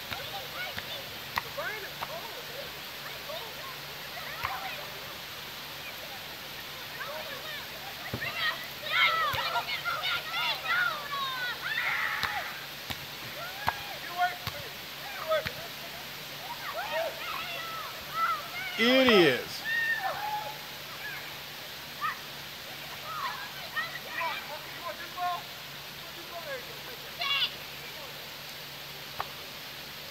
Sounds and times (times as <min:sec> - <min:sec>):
Rain on surface: 0:00.0 - 0:30.1.